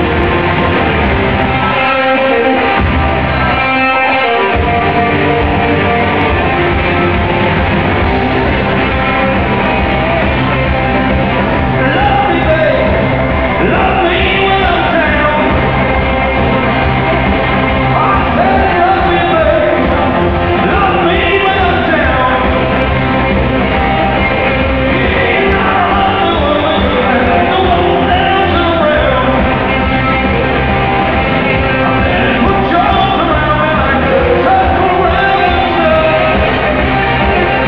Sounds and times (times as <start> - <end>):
Progressive rock: 0.0 - 37.6
Punk rock: 0.0 - 37.6.